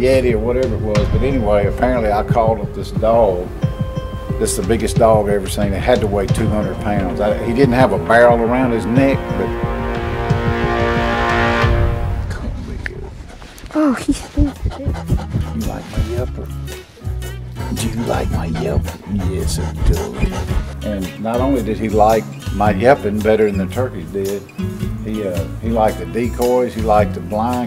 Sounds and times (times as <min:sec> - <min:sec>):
Speech: 0:00.0 - 0:03.5, 0:04.4 - 0:09.5, 0:12.3 - 0:13.1, 0:13.8 - 0:16.5, 0:17.7 - 0:24.4, 0:25.0 - 0:27.6
Music: 0:00.0 - 0:12.9, 0:14.3 - 0:27.6
Dog: 0:12.9 - 0:16.6, 0:17.6 - 0:20.8.